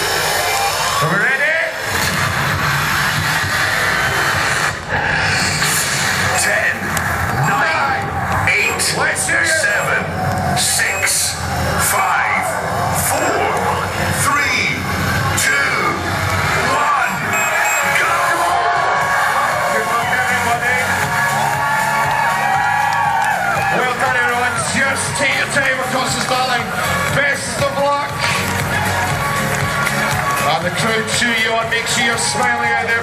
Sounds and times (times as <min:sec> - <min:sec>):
Music: 0:00.0 - 0:33.0
Outside, urban or manmade: 0:00.0 - 0:33.0
Speech: 0:01.0 - 0:01.8, 0:06.3 - 0:06.8, 0:07.4 - 0:16.1, 0:19.7 - 0:20.9, 0:23.7 - 0:28.3, 0:30.5 - 0:33.0
Run: 0:20.9 - 0:33.0.